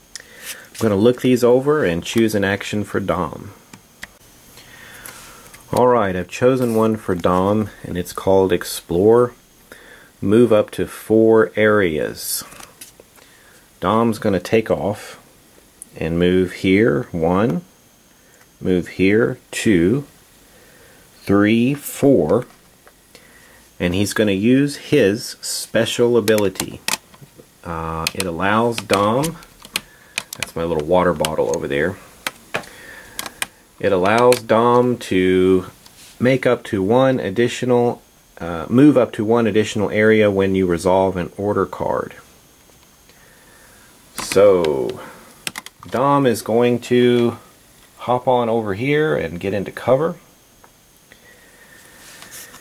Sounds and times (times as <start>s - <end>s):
Speech: 0.8s - 3.6s, 5.7s - 9.4s, 10.2s - 12.7s, 13.8s - 15.3s, 15.9s - 17.7s, 18.6s - 20.2s, 21.2s - 22.6s, 23.8s - 26.9s, 27.6s - 29.5s, 30.4s - 32.1s, 33.8s - 42.3s, 44.2s - 45.3s, 45.9s - 50.3s.